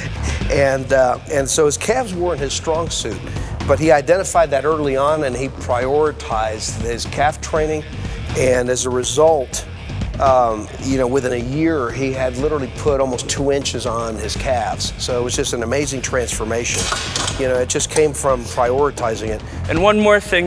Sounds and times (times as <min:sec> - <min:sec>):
Music: 0:00.0 - 0:20.4
Speech: 0:00.4 - 0:20.4.